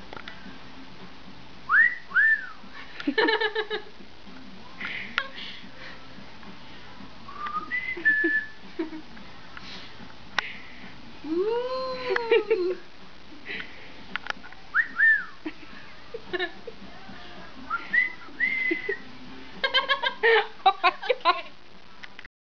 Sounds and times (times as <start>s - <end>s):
Whistling: 1.7s - 2.6s, 7.3s - 8.6s, 14.7s - 15.4s, 17.7s - 19.1s.